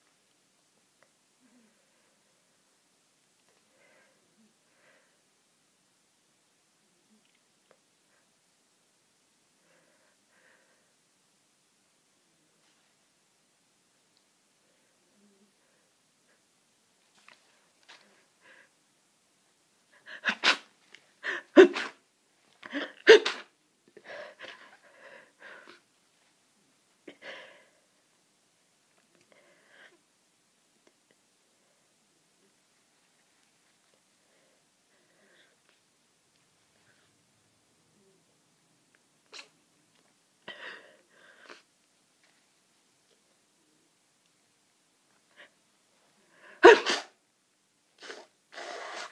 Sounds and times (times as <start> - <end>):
Sneeze: 20.2 - 20.7, 21.6 - 22.0, 23.0 - 23.5, 39.3 - 39.6, 46.6 - 47.2, 48.0 - 49.1.